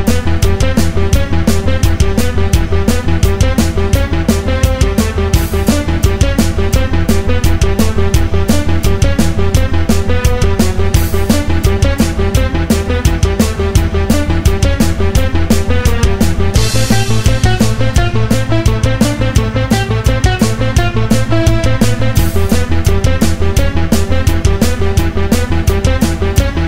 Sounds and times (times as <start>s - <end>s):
Theme music: 0.0s - 26.6s.